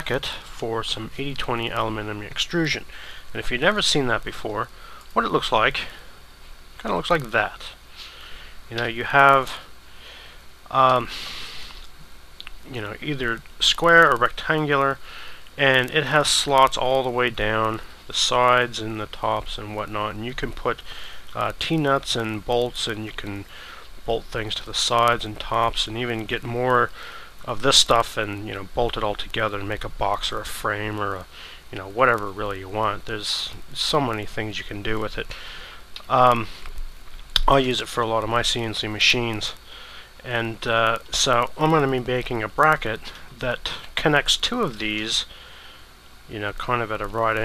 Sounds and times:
Speech: 0.0s - 6.1s, 6.8s - 7.8s, 8.7s - 9.7s, 10.7s - 11.2s, 12.4s - 15.0s, 15.6s - 23.5s, 24.1s - 35.4s, 36.0s - 36.6s, 37.4s - 45.3s, 46.3s - 47.4s.

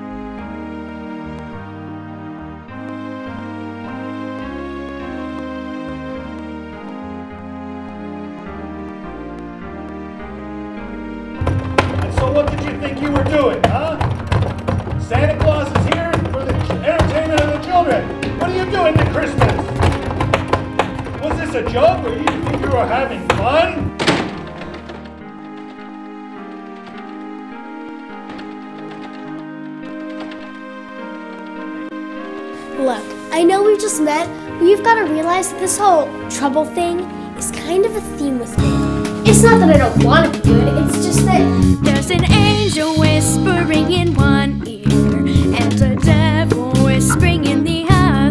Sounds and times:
Music: 0.0s - 48.3s
Speech: 21.2s - 23.8s, 32.8s - 38.6s, 39.2s - 41.4s.

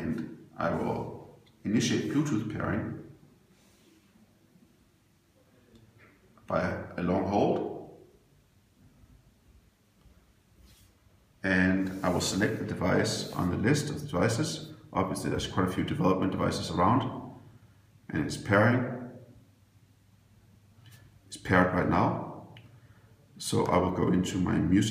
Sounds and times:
Speech: 0.0s - 3.2s, 6.4s - 8.0s, 11.4s - 17.4s, 18.1s - 19.2s, 21.3s - 22.6s, 23.4s - 24.9s.

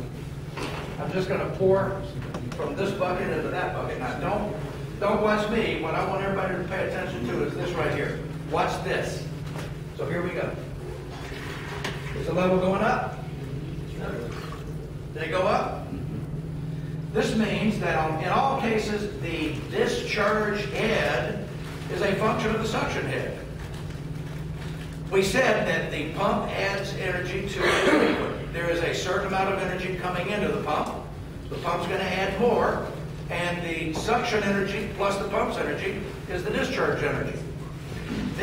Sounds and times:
Speech: 1.0s - 9.3s, 10.0s - 10.7s, 12.2s - 14.5s, 15.1s - 16.3s, 17.1s - 23.5s, 25.1s - 38.4s.

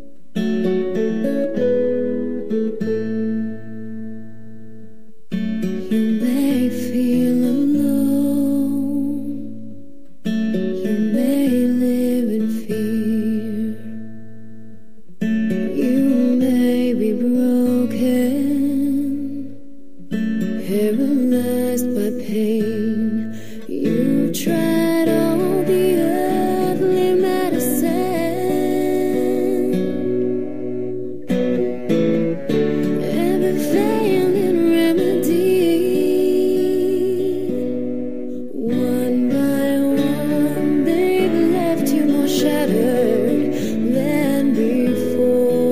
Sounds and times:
Music: 0.0s - 45.7s.

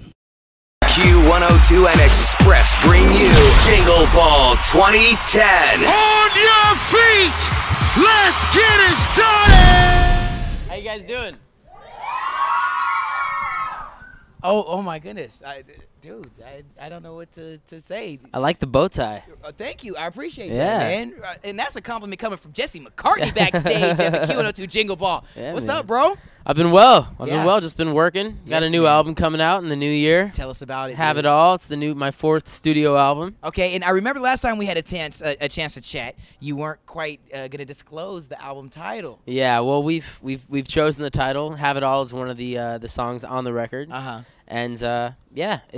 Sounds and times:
Speech: 0.8s - 10.1s, 10.7s - 11.4s, 14.4s - 45.7s.

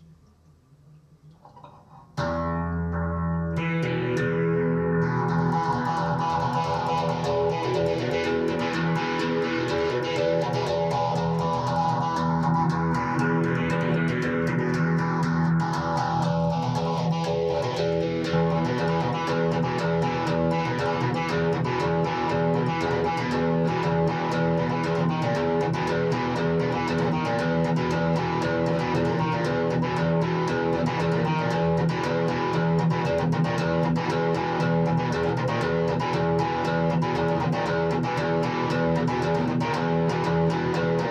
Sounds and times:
Electric guitar: 1.3s - 41.1s
Tapping (guitar technique): 1.3s - 41.1s.

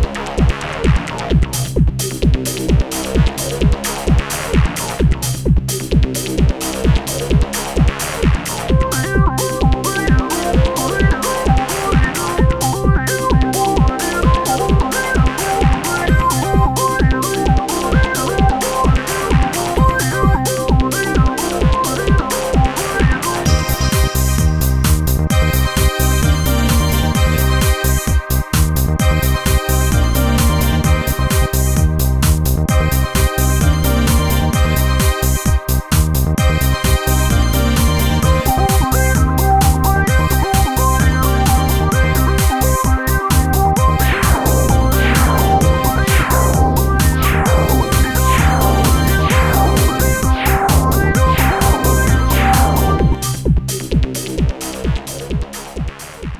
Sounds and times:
Music: 0.0s - 56.3s.

